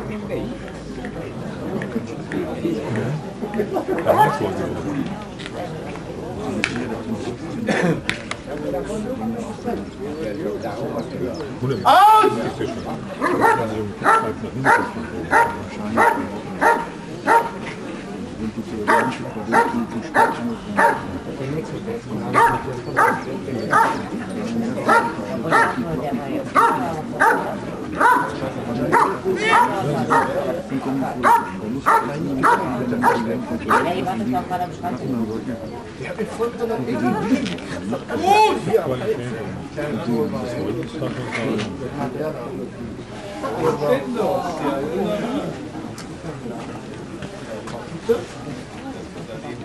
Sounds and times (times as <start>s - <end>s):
Speech: 0.0s - 49.6s
Bow-wow: 4.1s - 4.4s, 13.2s - 17.6s, 18.9s - 21.1s, 22.3s - 24.0s, 24.8s - 25.8s, 26.6s - 30.4s, 31.2s - 34.0s.